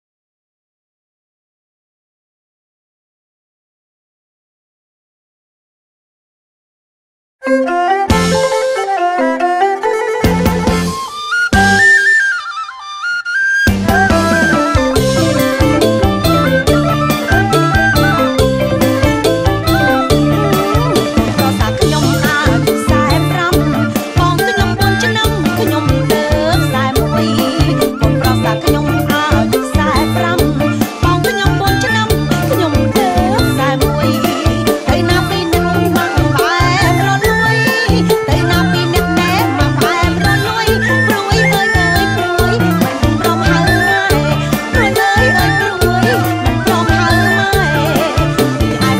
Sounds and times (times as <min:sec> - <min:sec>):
Flute: 0:07.4 - 0:49.0.